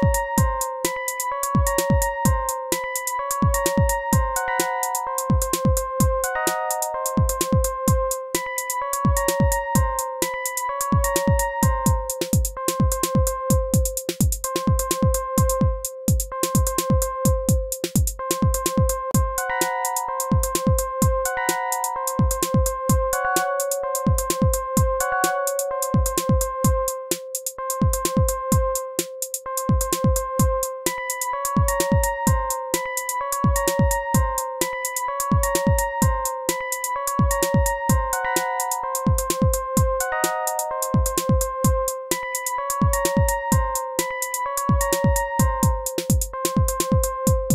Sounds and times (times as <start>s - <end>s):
Music: 0.0s - 47.5s.